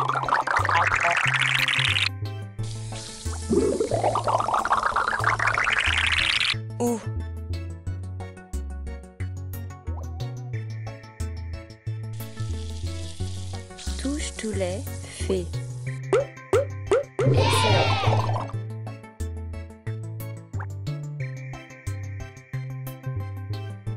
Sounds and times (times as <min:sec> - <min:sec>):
Music: 0:00.0 - 0:23.9
Speech: 0:13.9 - 0:15.6, 0:17.3 - 0:18.1.